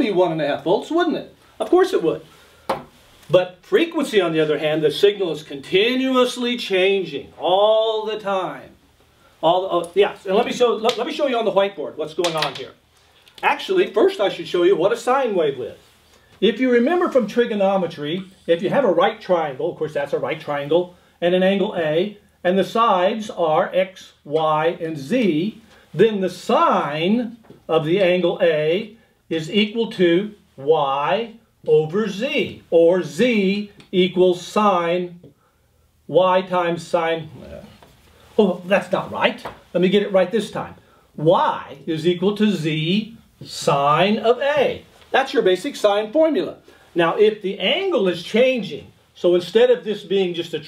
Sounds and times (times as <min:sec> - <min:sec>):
Speech: 0:00.0 - 0:02.3, 0:03.3 - 0:08.8, 0:09.4 - 0:12.8, 0:13.4 - 0:35.4, 0:36.1 - 0:50.6.